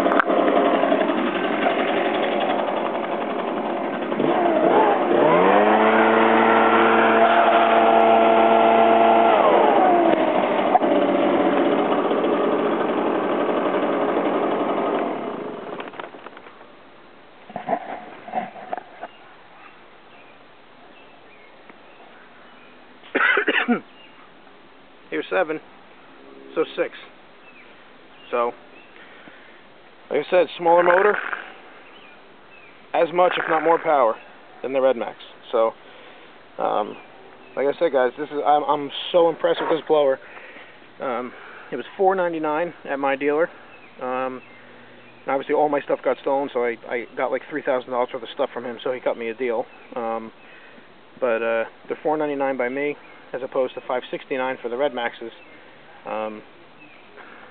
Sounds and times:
Speech: 25.1s - 25.6s, 26.5s - 27.1s, 28.3s - 28.6s, 30.1s - 31.2s, 33.0s - 35.8s, 36.6s - 37.0s, 37.6s - 40.2s, 41.0s - 44.5s, 45.3s - 50.4s, 51.2s - 55.4s, 56.0s - 56.5s.

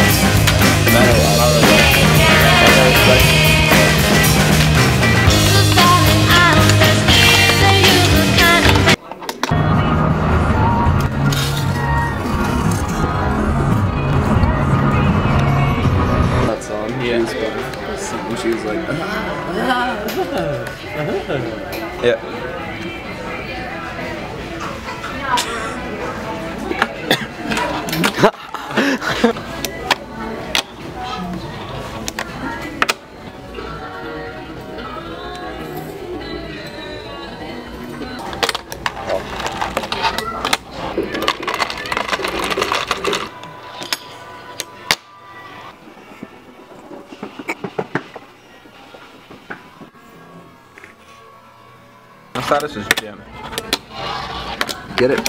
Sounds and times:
Music: 0.0s - 18.3s, 27.1s - 55.2s
Inside, public space: 0.0s - 55.2s.

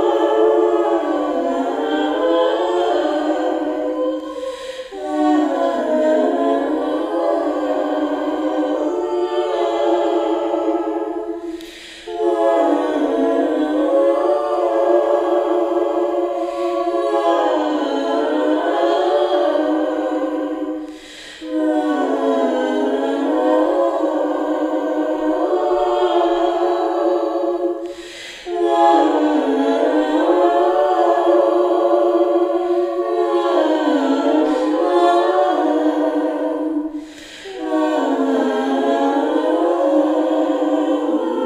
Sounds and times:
Choir: 0.0s - 41.4s.

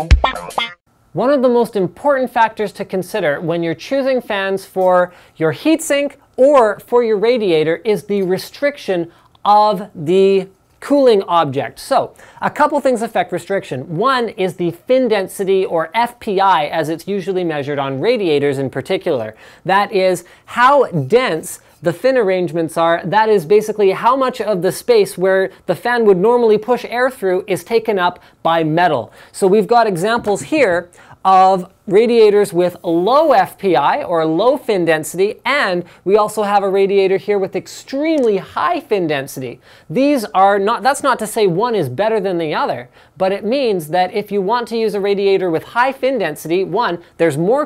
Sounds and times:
Speech: 1.2s - 47.6s.

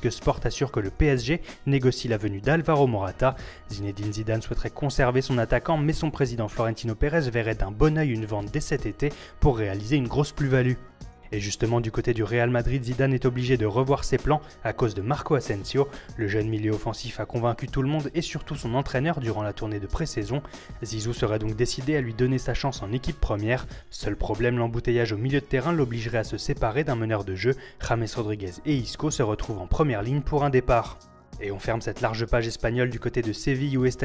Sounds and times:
Music: 0.0s - 34.0s
Speech: 0.0s - 34.0s.

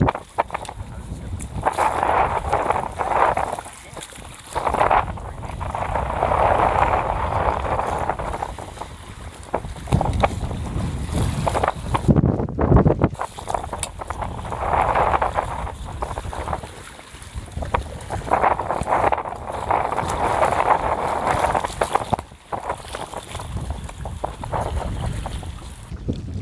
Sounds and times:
Sailboat, sailing ship: 0.0s - 26.4s.

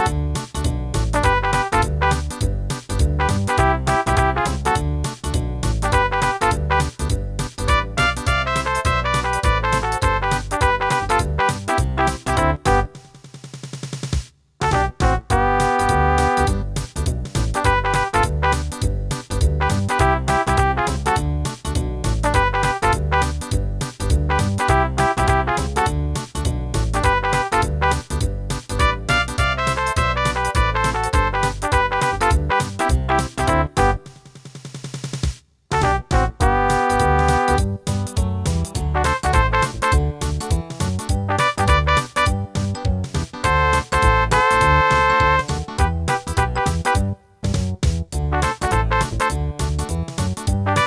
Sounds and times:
Music: 0.0s - 50.8s.

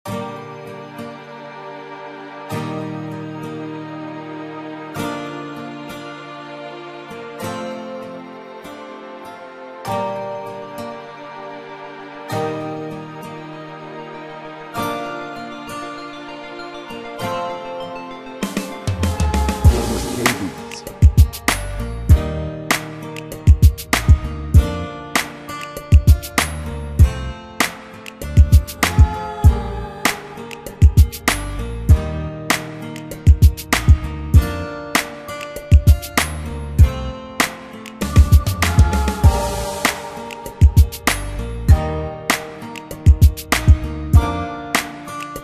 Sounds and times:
Guitar: 0.0s - 45.4s.

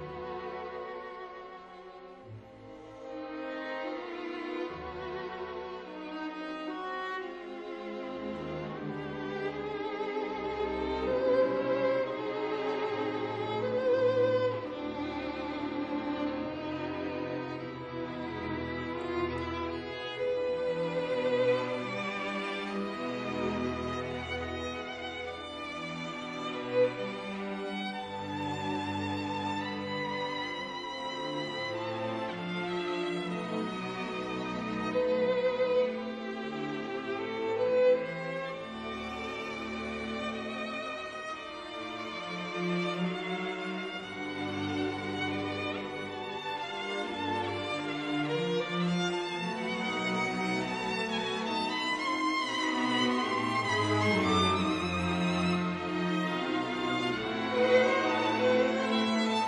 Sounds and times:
Orchestra: 0.0s - 59.4s
Violin, fiddle: 0.0s - 59.4s.

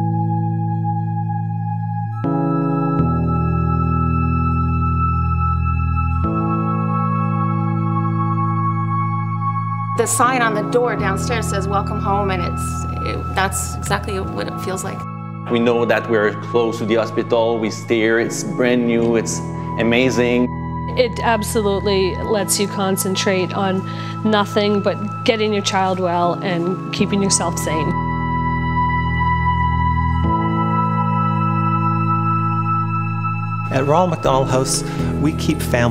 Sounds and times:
Music: 0.0s - 35.9s
Speech: 10.0s - 27.9s, 33.7s - 35.9s.

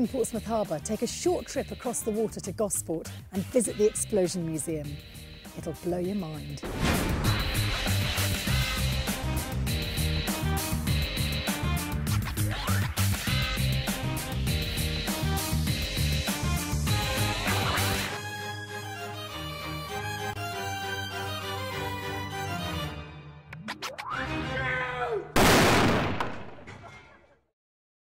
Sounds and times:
Music: 0.0s - 25.4s
Explosion: 6.6s - 8.8s, 25.4s - 26.8s.

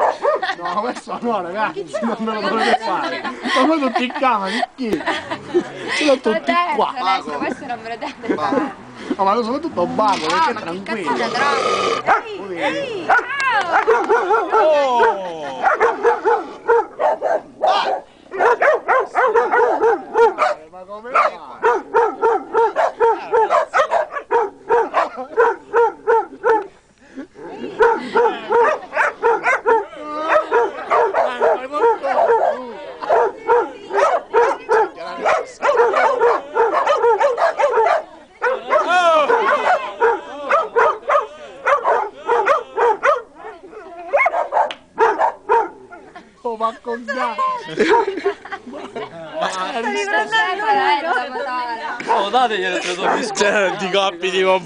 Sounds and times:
Bow-wow: 13.1s - 20.6s, 21.2s - 26.7s, 27.8s - 46.0s.

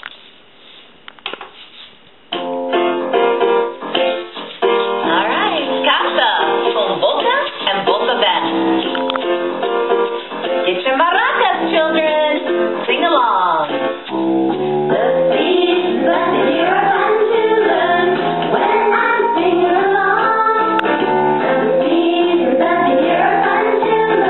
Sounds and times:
Music: 2.3s - 24.3s
Female singing: 15.0s - 20.6s, 21.7s - 24.3s.

